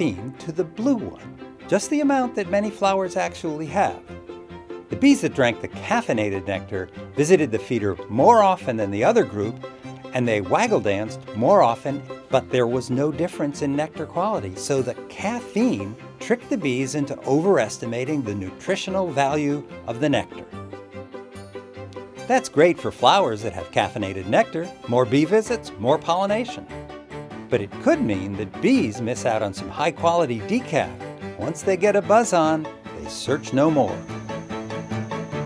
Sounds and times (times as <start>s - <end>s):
Cricket: 33.8s - 35.4s.